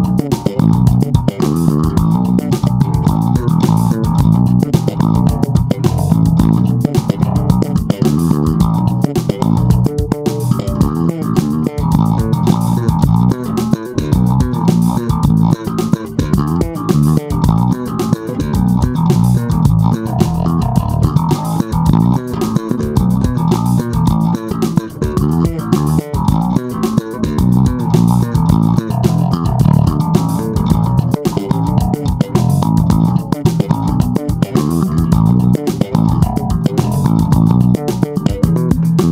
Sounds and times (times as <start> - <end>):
Bass guitar: 0.0 - 39.1.